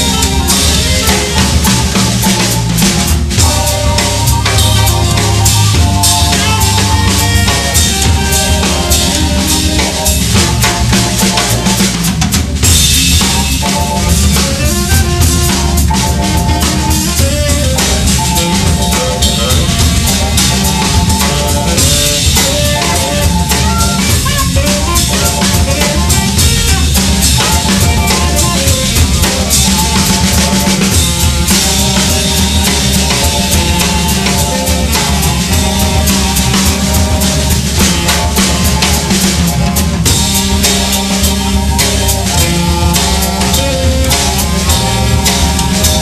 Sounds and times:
Music: 0.0s - 46.0s.

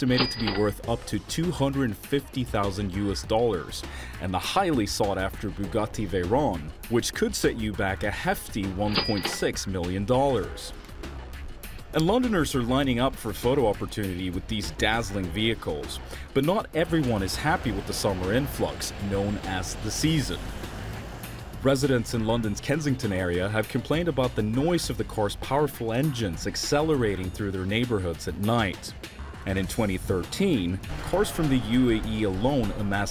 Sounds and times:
Speech: 0.0s - 10.7s, 11.9s - 20.4s, 21.6s - 33.1s
Music: 0.0s - 33.1s.

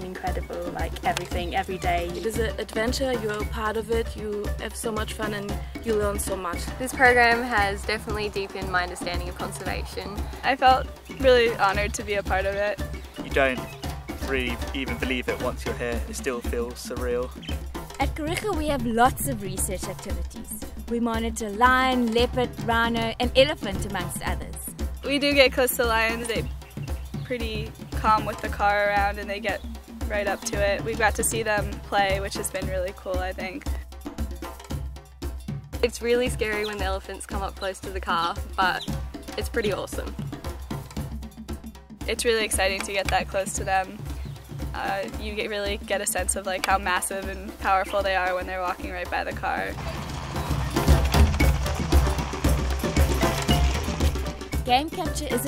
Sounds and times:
Speech: 0.0s - 13.6s, 14.2s - 17.4s, 18.0s - 26.5s, 27.3s - 33.8s, 35.8s - 40.1s, 42.1s - 44.0s, 44.8s - 49.8s, 54.7s - 55.4s
Music: 0.0s - 55.4s.

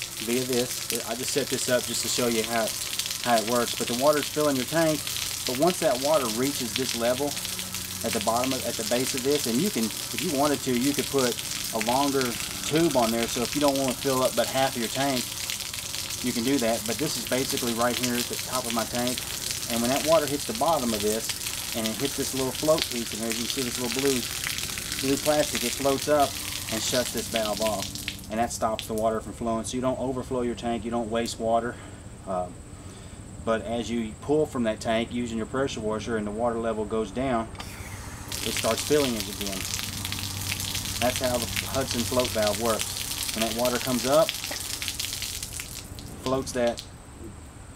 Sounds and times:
Speech: 0.2s - 7.4s, 8.0s - 15.3s, 16.2s - 24.3s, 25.0s - 32.6s, 33.4s - 37.6s, 38.4s - 39.7s, 41.0s - 42.8s, 43.4s - 44.3s, 46.3s - 46.8s.

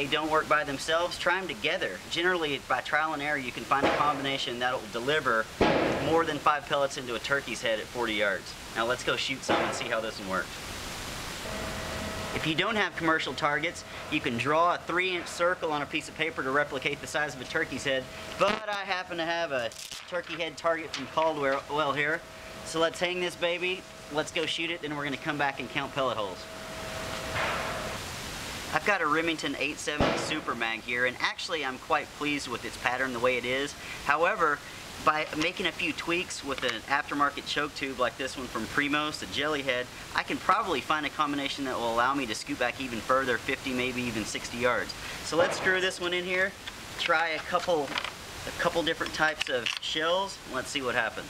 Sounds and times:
Speech: 0.0s - 10.5s, 12.4s - 26.4s, 28.7s - 51.2s.

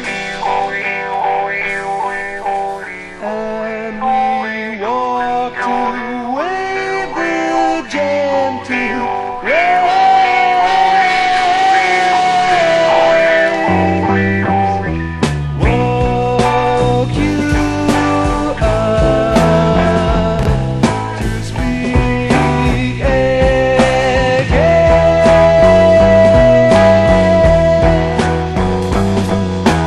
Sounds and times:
Psychedelic rock: 0.0s - 29.8s.

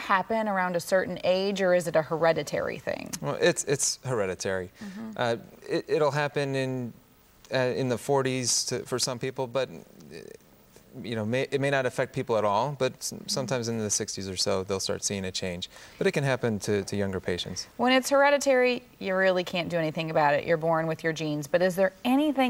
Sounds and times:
Speech: 3.2s - 6.7s, 11.0s - 17.6s.

